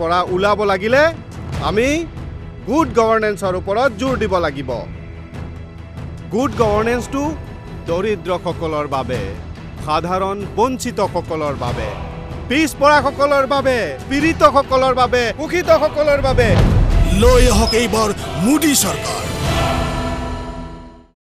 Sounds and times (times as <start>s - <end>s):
Male speech, man speaking: 0.0s - 2.1s, 2.7s - 4.9s, 6.3s - 19.5s.